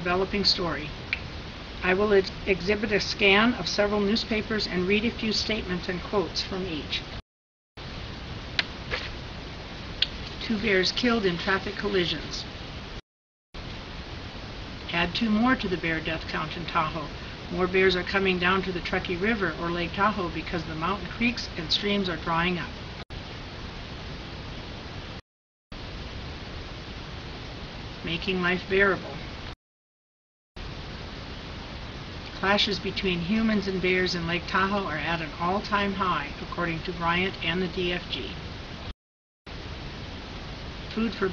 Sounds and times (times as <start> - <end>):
Speech: 0.0 - 1.0, 1.8 - 7.1, 10.3 - 12.5, 14.9 - 22.8, 28.0 - 29.3, 32.3 - 38.4, 40.9 - 41.3.